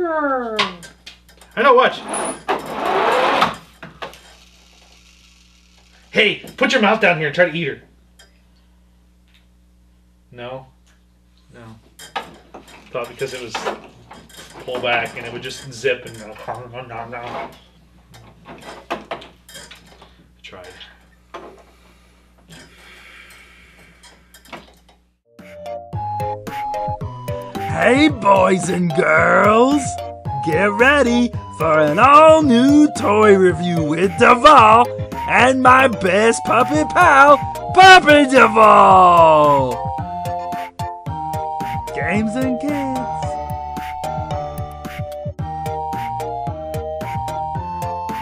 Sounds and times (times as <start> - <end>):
Music for children: 25.3 - 48.2
Speech: 27.7 - 39.8, 42.0 - 43.3.